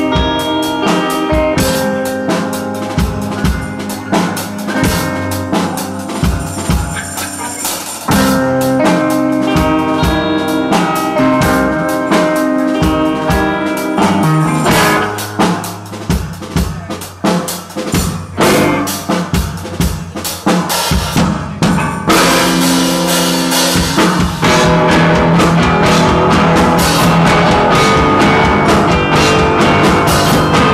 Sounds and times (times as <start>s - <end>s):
Drum kit: 0.0s - 30.7s.